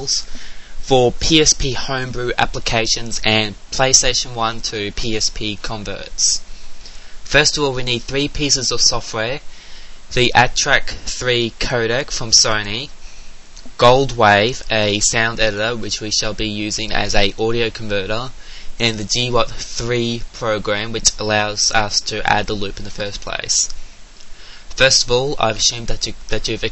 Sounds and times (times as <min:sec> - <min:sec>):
Speech: 0:00.0 - 0:06.5, 0:07.3 - 0:09.5, 0:10.1 - 0:13.0, 0:13.6 - 0:23.8, 0:24.7 - 0:26.7.